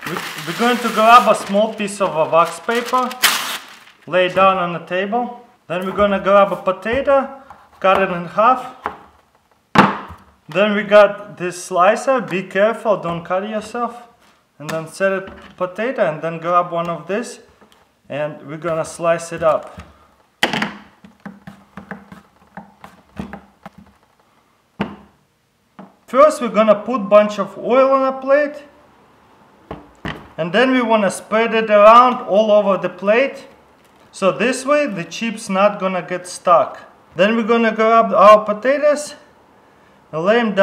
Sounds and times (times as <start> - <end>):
Speech: 0.0 - 3.2, 4.1 - 8.8, 10.5 - 17.5, 18.1 - 19.8, 26.1 - 28.8, 30.4 - 39.3, 40.1 - 40.6.